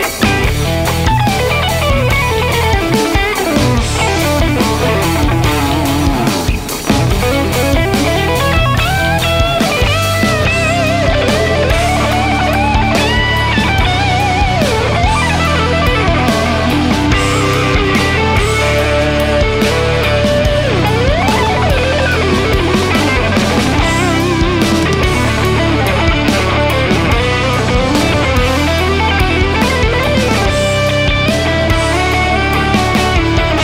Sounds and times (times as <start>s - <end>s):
Electric guitar: 0.0s - 33.6s
Strum: 0.0s - 33.6s.